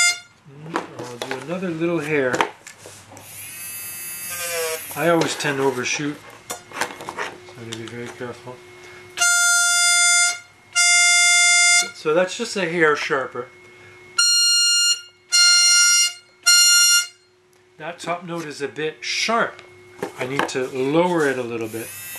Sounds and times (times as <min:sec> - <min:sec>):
Speech: 0:00.5 - 0:02.4, 0:05.0 - 0:06.2, 0:07.6 - 0:08.6, 0:11.8 - 0:13.5, 0:17.8 - 0:19.6, 0:20.2 - 0:21.9.